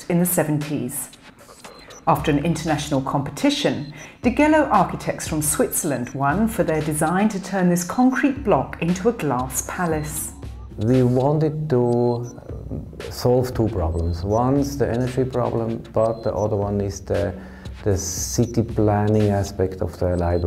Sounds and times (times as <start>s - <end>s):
Speech: 0.0s - 1.1s, 2.0s - 20.4s
Music: 0.0s - 20.4s.